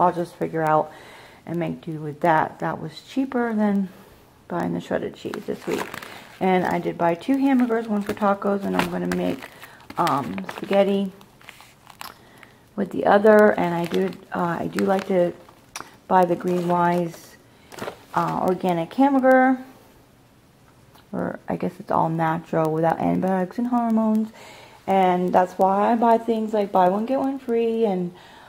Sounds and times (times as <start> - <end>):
Speech: 0.0 - 0.9, 1.5 - 9.4, 10.0 - 11.2, 12.8 - 15.4, 16.1 - 17.4, 18.2 - 19.8, 21.1 - 28.2
Crumpling, crinkling: 4.9 - 19.3.